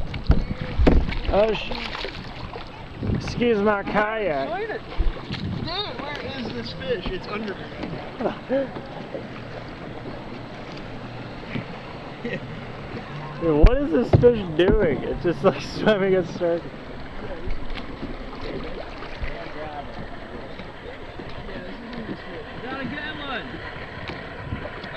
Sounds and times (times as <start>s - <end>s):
Rowboat, canoe, kayak: 0.0s - 24.9s.